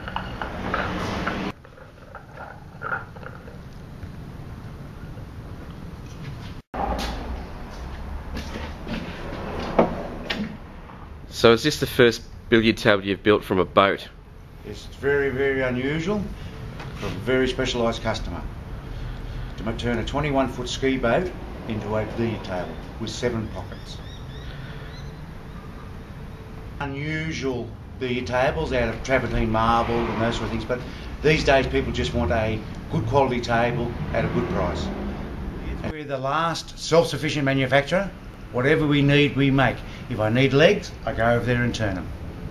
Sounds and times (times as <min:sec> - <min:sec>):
Speech: 0:11.3 - 0:16.3, 0:17.0 - 0:18.5, 0:19.6 - 0:24.0, 0:26.8 - 0:34.9, 0:35.7 - 0:42.1.